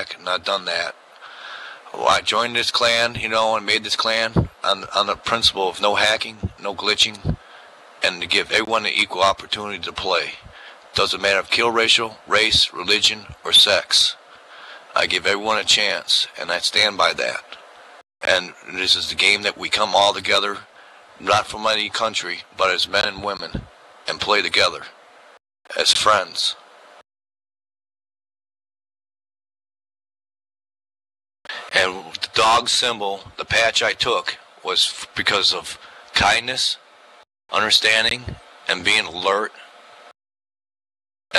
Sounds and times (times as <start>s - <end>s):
Male speech, man speaking: 0.0s - 1.0s, 1.9s - 7.4s, 8.0s - 14.2s, 15.0s - 17.6s, 18.2s - 25.0s, 25.7s - 26.6s, 31.7s - 36.8s, 37.5s - 39.7s
Narration, monologue: 0.0s - 27.0s, 31.5s - 40.2s.